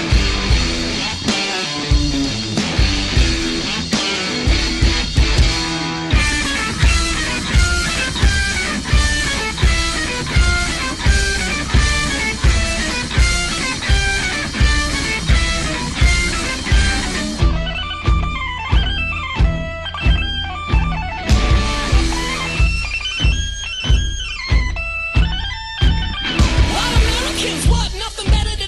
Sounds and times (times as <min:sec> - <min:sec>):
Punk rock: 0:00.0 - 0:28.6.